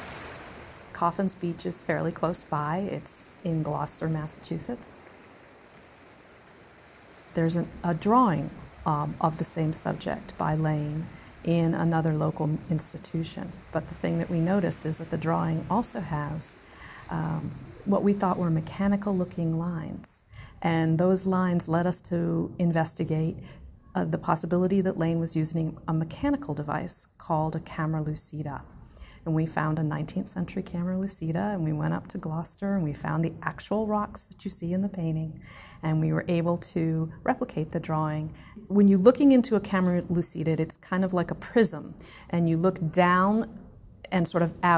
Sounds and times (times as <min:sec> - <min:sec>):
Speech: 0:01.0 - 0:05.0, 0:07.4 - 0:23.4, 0:24.0 - 0:28.6, 0:29.2 - 0:44.7.